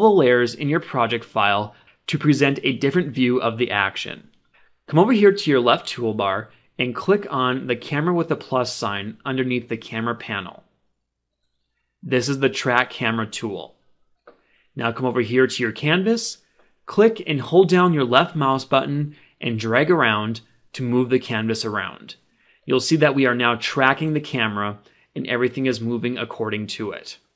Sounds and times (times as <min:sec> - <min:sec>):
Speech: 0:00.0 - 0:04.3, 0:04.9 - 0:10.7, 0:12.0 - 0:13.8, 0:14.8 - 0:27.3.